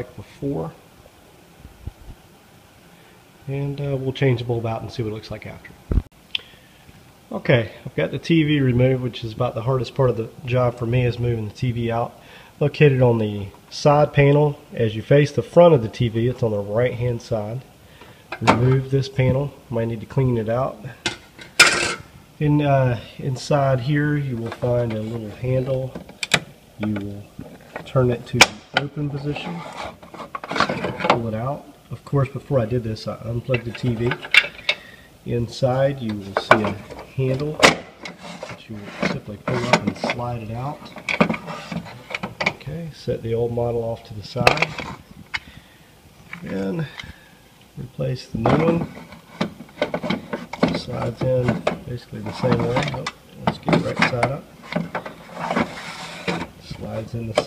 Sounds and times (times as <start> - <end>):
Speech: 0.0 - 0.8, 3.4 - 5.8, 7.3 - 17.7, 18.4 - 21.0, 22.4 - 26.0, 26.8 - 29.8, 30.9 - 34.2, 35.2 - 37.7, 38.5 - 40.9, 42.5 - 44.9, 46.4 - 47.1, 47.8 - 49.0, 50.6 - 54.5, 56.6 - 57.4.